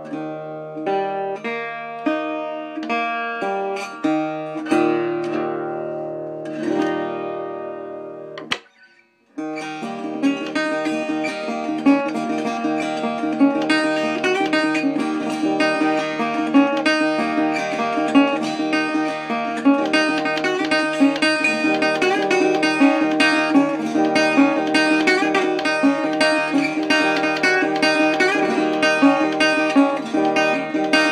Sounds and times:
Strum: 0:00.0 - 0:31.1.

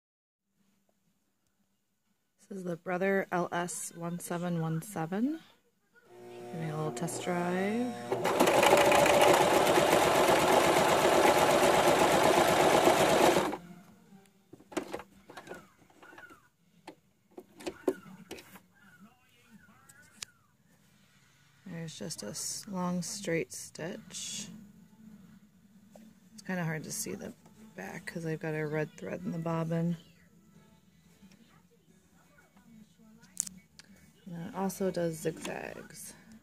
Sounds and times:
Speech: 0:02.4 - 0:08.0, 0:21.6 - 0:24.6, 0:26.4 - 0:30.3, 0:31.3 - 0:36.4
Sewing machine: 0:06.2 - 0:13.6.

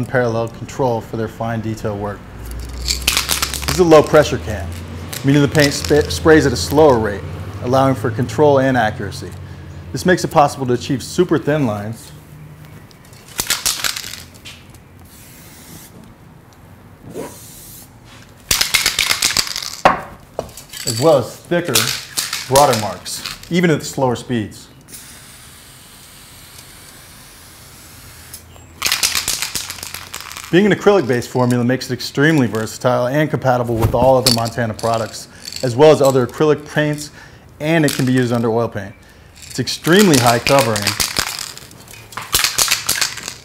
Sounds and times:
Speech: 0:00.0 - 0:02.2, 0:03.7 - 0:12.2, 0:20.8 - 0:24.7, 0:30.5 - 0:39.0, 0:39.6 - 0:41.0
Spray: 0:15.1 - 0:16.0, 0:17.2 - 0:17.9, 0:24.9 - 0:28.4.

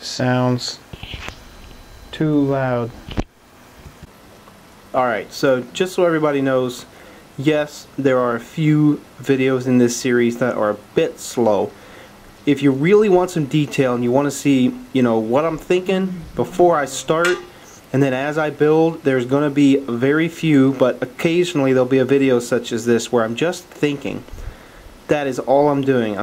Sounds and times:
Speech: 0:00.0 - 0:00.9, 0:02.1 - 0:03.0, 0:04.9 - 0:11.8, 0:12.5 - 0:24.3, 0:25.1 - 0:26.2.

